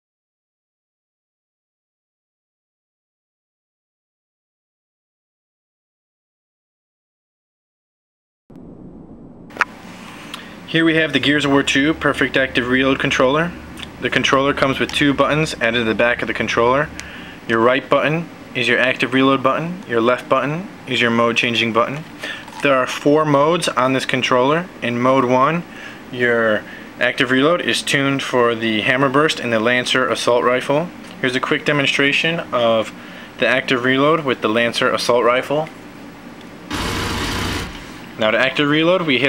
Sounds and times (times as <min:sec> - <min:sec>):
Speech: 0:10.7 - 0:35.8, 0:38.2 - 0:39.2.